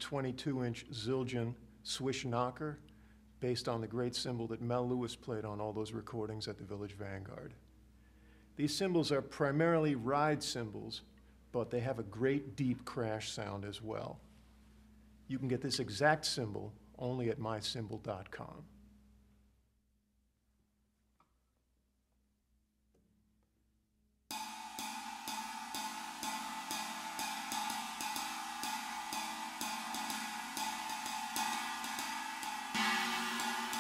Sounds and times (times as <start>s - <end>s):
Music: 24.3s - 33.8s.